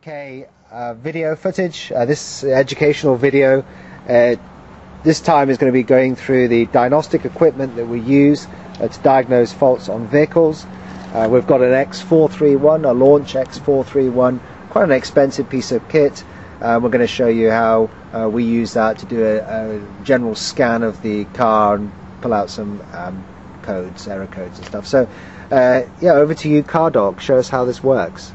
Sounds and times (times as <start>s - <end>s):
Speech: 0.0s - 4.4s, 5.0s - 28.3s.